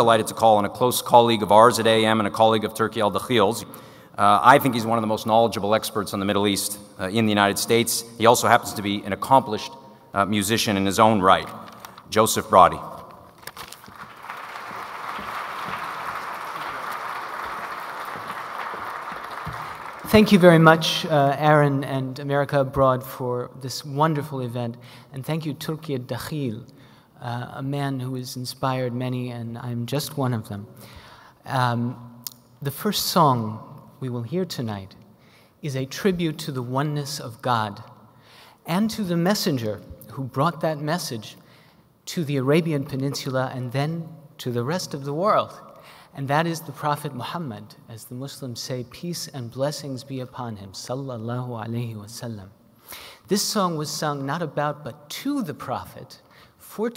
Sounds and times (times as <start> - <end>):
Speech: 0.0 - 13.0, 20.1 - 30.7, 31.4 - 35.0, 35.6 - 37.9, 38.7 - 41.4, 42.1 - 52.6, 53.3 - 56.9.